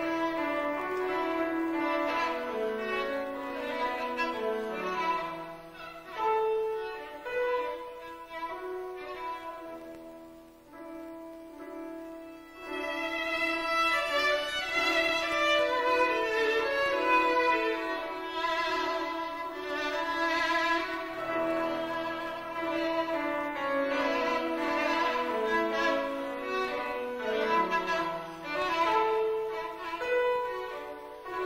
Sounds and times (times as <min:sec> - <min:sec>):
Violin, fiddle: 0:00.0 - 0:31.4.